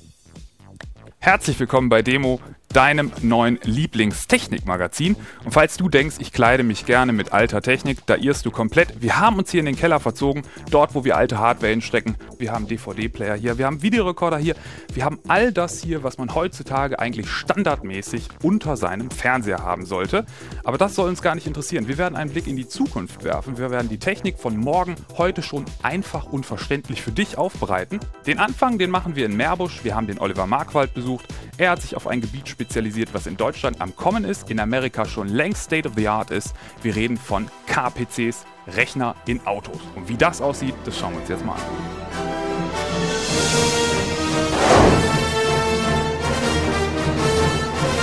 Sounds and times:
Music: 0.0 - 48.0
Speech: 1.2 - 41.7.

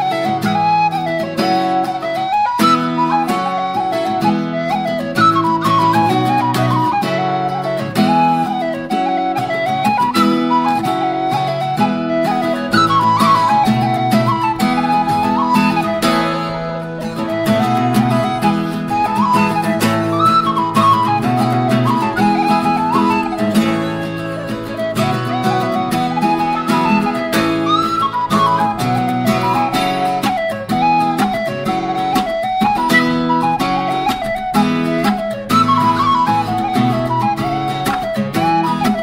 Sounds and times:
Whistle: 0.0 - 39.0.

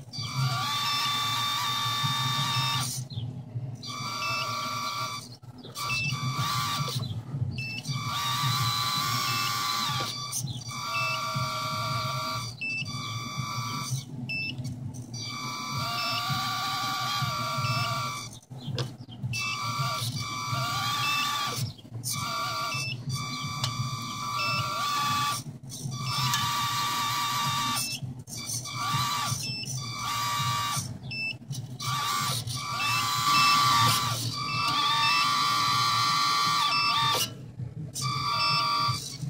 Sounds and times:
Reversing beeps: 5.9 - 6.5, 7.6 - 8.0, 10.1 - 11.4, 12.3 - 14.6, 19.4 - 19.7, 22.7 - 24.8, 29.4 - 30.1, 31.1 - 31.4, 32.8 - 35.3, 36.7 - 37.1, 38.1 - 39.2.

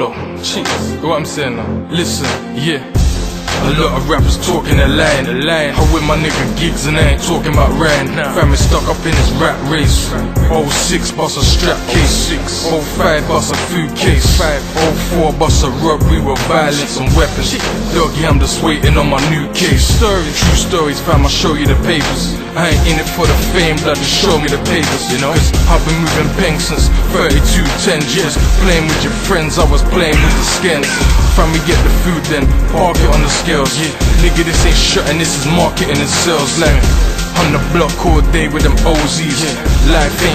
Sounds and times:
Music: 0.0 - 40.3.

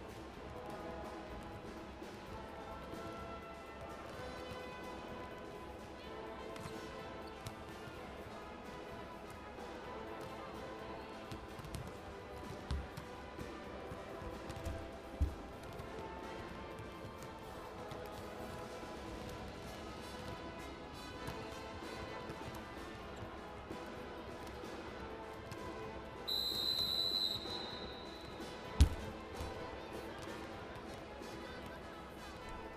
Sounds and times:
Music: 0.0 - 32.7.

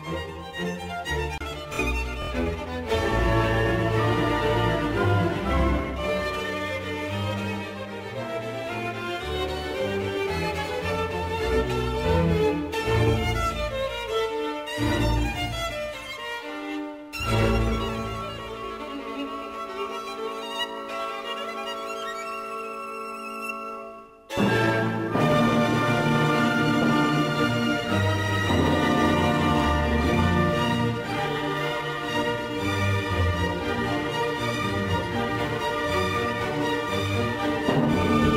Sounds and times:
Violin, fiddle: 0.0 - 38.3.

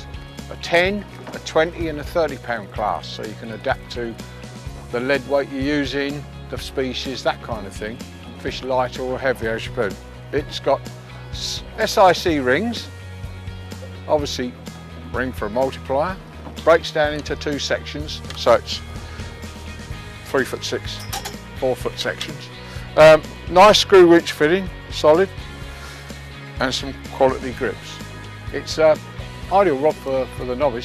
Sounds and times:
Music: 0.0 - 30.8
Speech: 0.5 - 4.2, 4.9 - 10.8, 11.4 - 12.9, 14.1 - 14.6, 15.2 - 18.8, 20.3 - 21.0, 21.6 - 25.3, 26.6 - 30.8.

